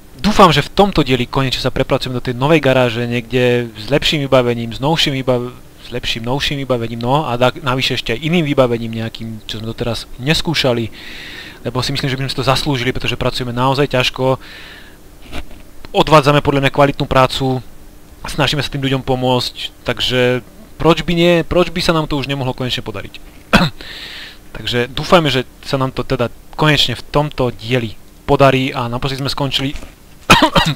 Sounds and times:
Speech: 0:00.2 - 0:11.0, 0:11.6 - 0:14.4, 0:15.9 - 0:23.8, 0:24.5 - 0:29.9.

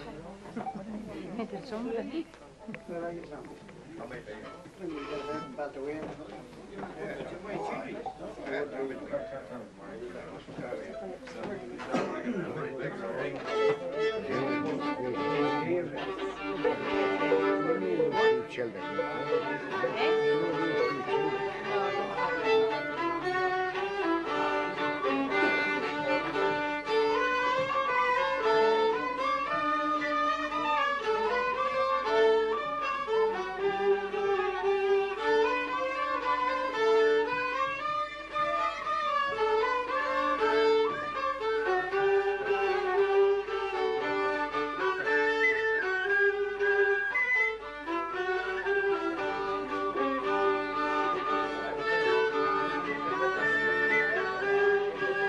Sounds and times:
Bowed string instrument: 0:00.0 - 0:55.2.

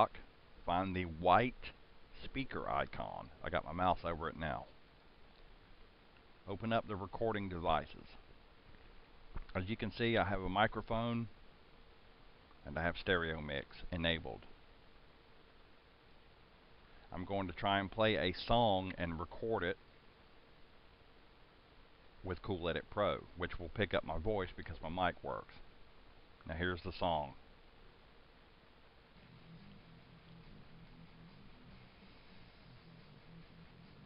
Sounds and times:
Speech: 0:00.0 - 0:04.8, 0:06.4 - 0:08.2, 0:09.5 - 0:11.4, 0:12.6 - 0:14.5, 0:17.1 - 0:19.8, 0:22.2 - 0:25.7, 0:26.4 - 0:27.4.

